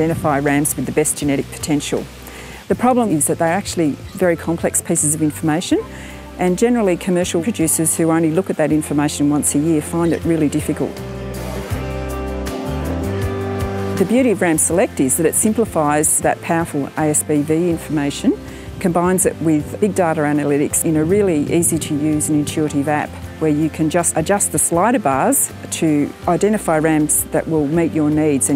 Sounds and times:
Speech: 0.0s - 2.1s, 2.7s - 11.0s, 14.0s - 28.5s
Music: 0.0s - 28.5s.

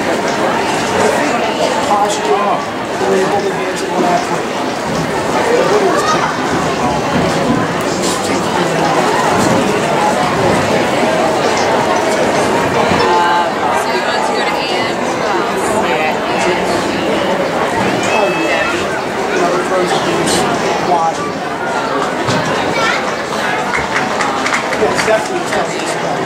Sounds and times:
Speech: 0.0s - 26.2s.

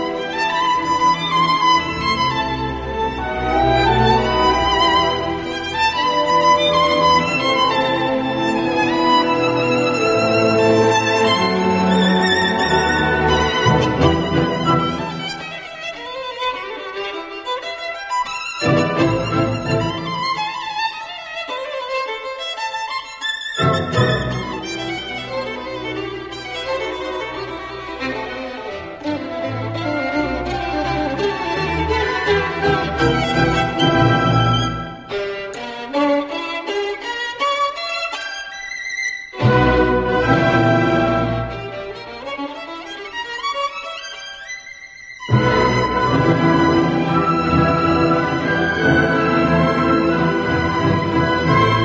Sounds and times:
Violin, fiddle: 0.0s - 51.8s.

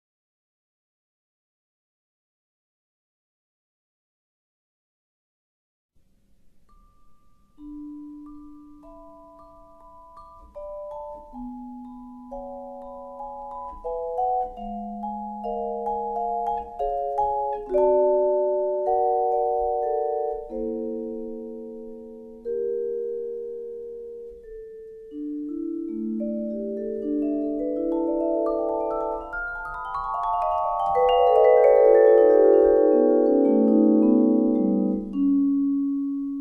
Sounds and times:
Marimba, xylophone: 6.7s - 36.4s.

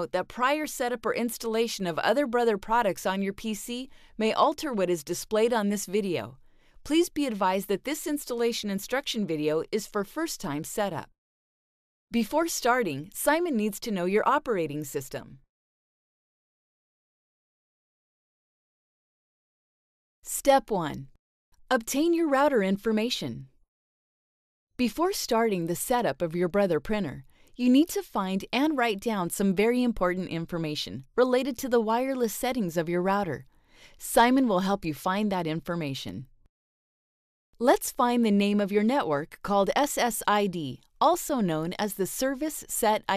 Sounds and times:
Speech: 0.0s - 11.1s, 12.1s - 15.4s, 20.3s - 21.1s, 21.7s - 23.5s, 24.8s - 33.4s, 34.0s - 36.3s, 37.6s - 43.1s.

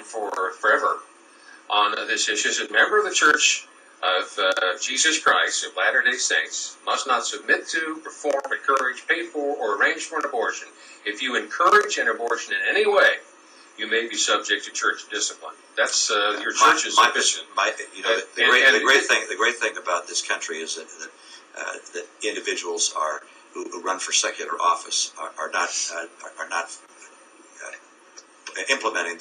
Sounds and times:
Speech: 0.0s - 27.0s, 27.6s - 27.8s, 28.5s - 29.2s
Radio: 0.0s - 29.2s.

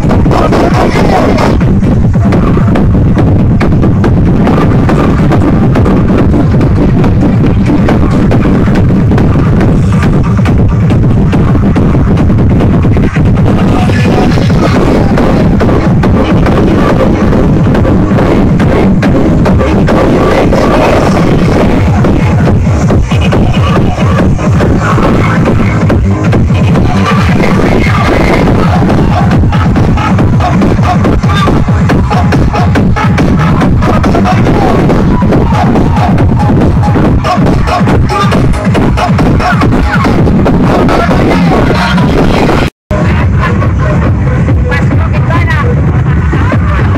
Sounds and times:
Music: 0.0s - 46.9s.

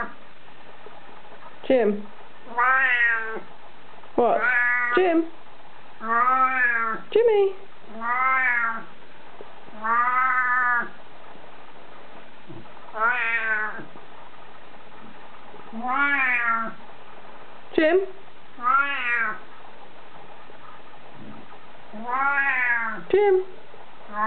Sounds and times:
Speech: 1.6s - 2.1s, 4.2s - 5.3s, 7.1s - 7.6s, 17.8s - 18.2s, 23.0s - 23.6s
Meow: 2.5s - 3.4s, 4.4s - 5.0s, 6.0s - 7.0s, 8.0s - 8.9s, 9.8s - 10.9s, 13.0s - 13.8s, 15.8s - 16.8s, 18.6s - 19.4s, 22.0s - 23.0s.

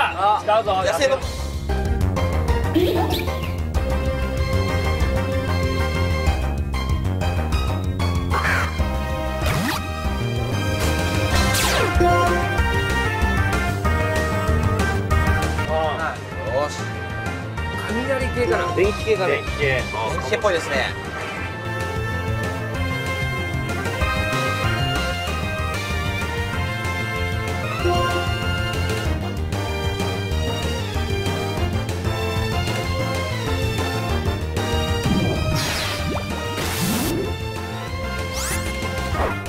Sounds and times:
Music: 0.0s - 39.4s.

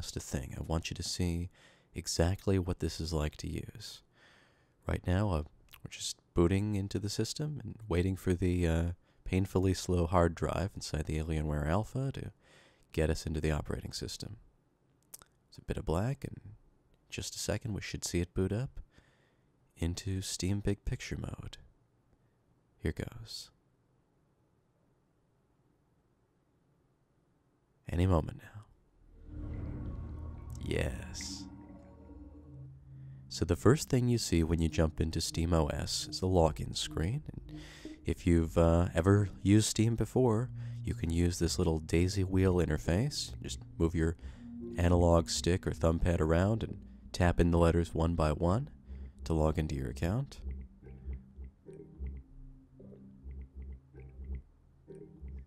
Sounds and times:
Speech: 0.0s - 4.1s, 4.8s - 12.4s, 13.0s - 14.4s, 15.5s - 18.9s, 19.8s - 21.7s, 22.8s - 23.6s, 27.9s - 28.8s, 30.6s - 31.5s, 33.3s - 50.4s.

